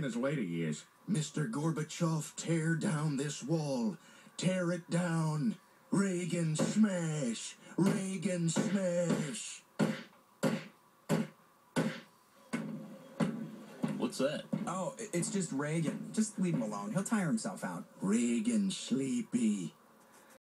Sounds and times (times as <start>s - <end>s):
Speech: 0.0s - 9.6s, 14.0s - 19.8s.